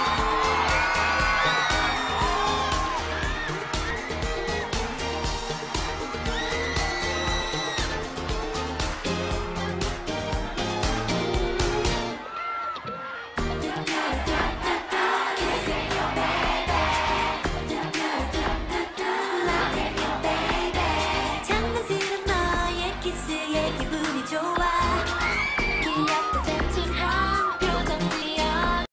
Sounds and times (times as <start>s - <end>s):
Music: 0.0s - 28.9s.